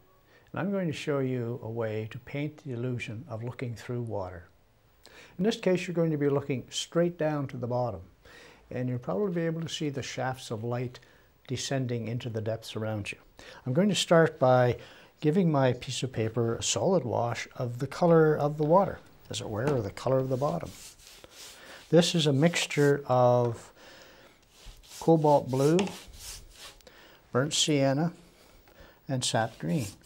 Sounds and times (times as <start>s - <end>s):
Speech: 0.5s - 4.5s, 5.4s - 8.1s, 8.7s - 20.8s, 21.9s - 23.7s, 25.0s - 26.0s, 27.3s - 28.2s, 29.1s - 30.0s.